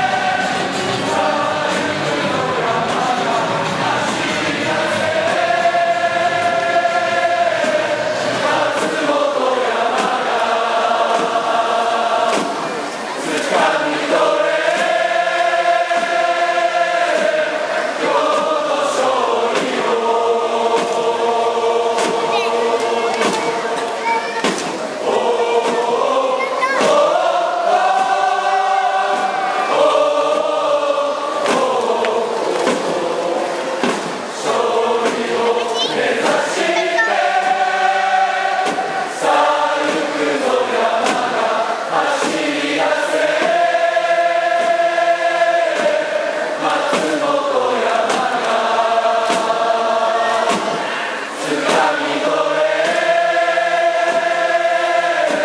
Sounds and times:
Mantra: 0.0 - 55.4
Speech: 22.0 - 27.4, 35.4 - 37.5.

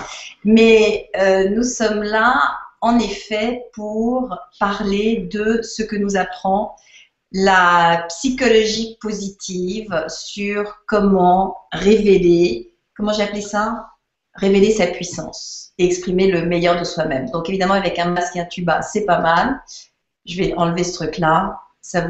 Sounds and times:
Speech: 0.0 - 6.8, 7.4 - 22.0.

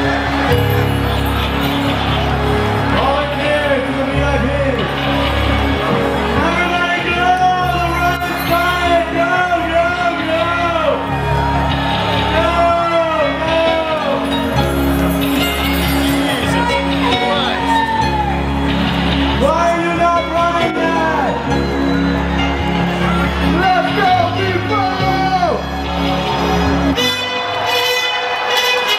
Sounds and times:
Music: 0.0 - 28.9.

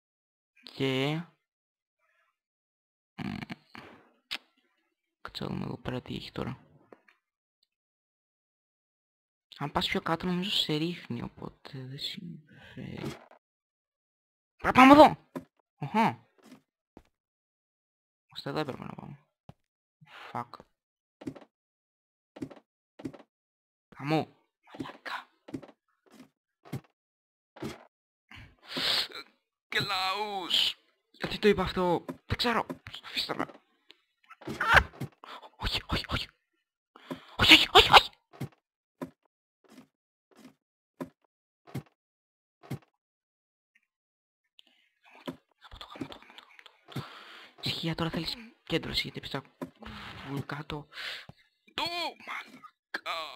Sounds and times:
Speech: 0.7 - 1.3, 5.3 - 6.6, 9.5 - 13.2, 14.6 - 15.2, 18.4 - 19.2, 24.0 - 25.2, 29.0 - 33.5, 37.3 - 38.1, 47.6 - 50.9, 51.8 - 53.3.

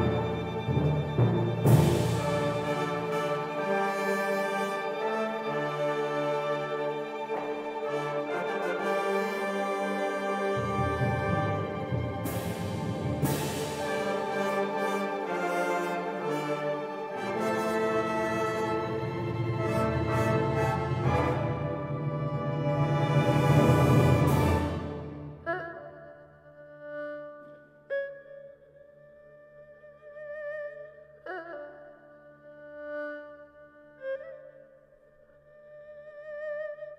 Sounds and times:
Orchestra: 0.0 - 27.4
Bowed string instrument: 0.0 - 34.8
Inside, large room or hall: 0.0 - 36.9.

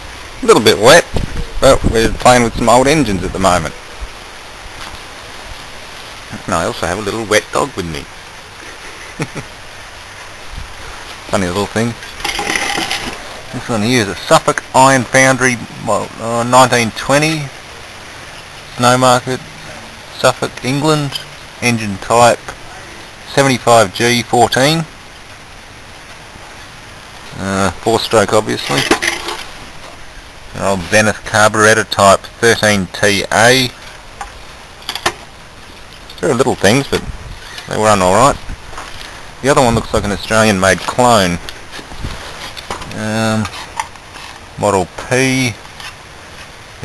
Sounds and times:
Speech: 0.4 - 3.8, 6.3 - 8.1, 11.3 - 12.0, 13.5 - 17.5, 18.7 - 24.9, 27.3 - 28.9, 30.5 - 33.8, 36.2 - 37.1, 37.7 - 38.4, 39.4 - 41.4, 42.9 - 43.5, 44.6 - 45.6.

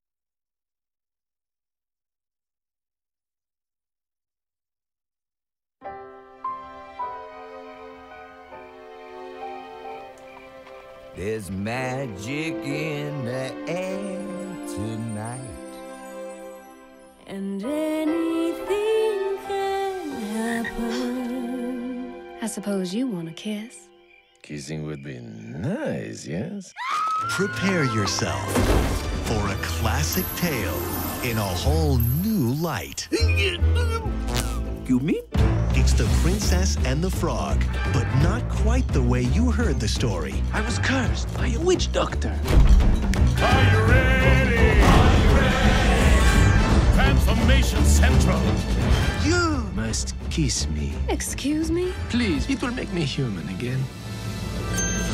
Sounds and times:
Music: 5.8 - 24.6, 27.2 - 55.1
Speech: 24.4 - 26.7, 34.9 - 42.4.

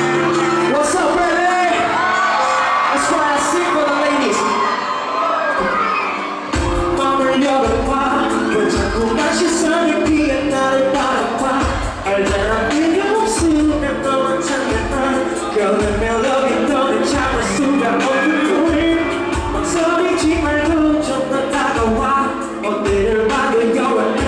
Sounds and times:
Inside, large room or hall: 0.0 - 24.2
Music: 0.0 - 24.2
Singing: 5.9 - 24.2.

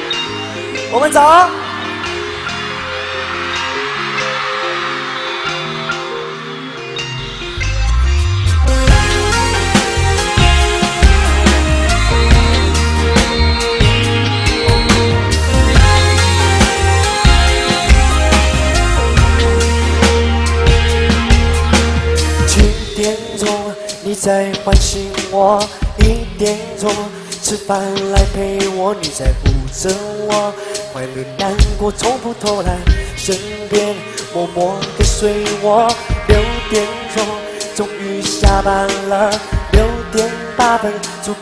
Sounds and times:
Music: 0.0 - 41.4.

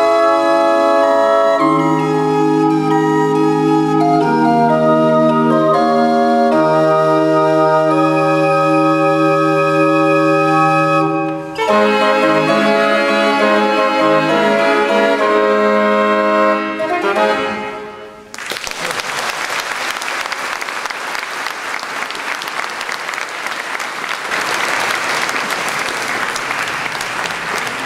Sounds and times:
Hammond organ: 0.0 - 18.0.

